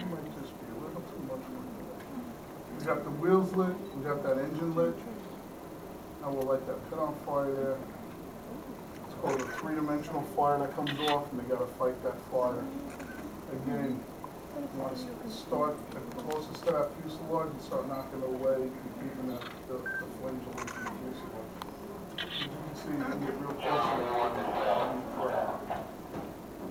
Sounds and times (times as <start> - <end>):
Speech: 0.0 - 5.1, 6.2 - 7.8, 9.1 - 12.7, 22.4 - 25.7.